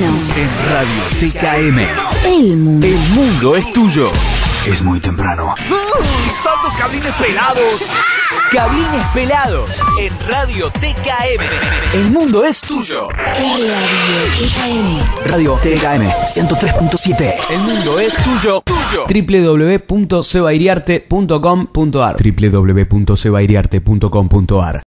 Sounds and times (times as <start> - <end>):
Speech: 0.0 - 7.9, 8.5 - 11.4, 12.0 - 24.8
Music: 0.0 - 19.1.